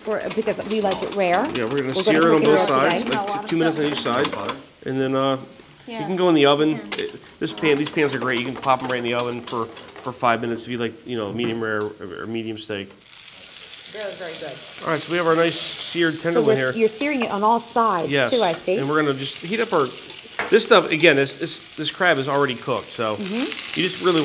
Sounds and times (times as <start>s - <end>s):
Inside, small room: 0.0s - 17.1s
Speech: 0.1s - 12.9s, 14.9s - 16.8s, 18.0s - 19.9s, 21.8s - 24.2s.